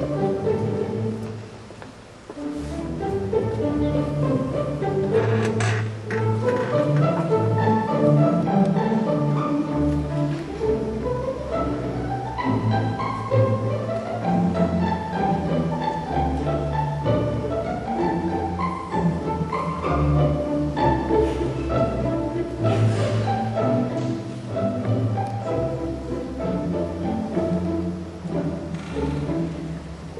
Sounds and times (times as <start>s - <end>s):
Violin, fiddle: 0.0s - 30.1s.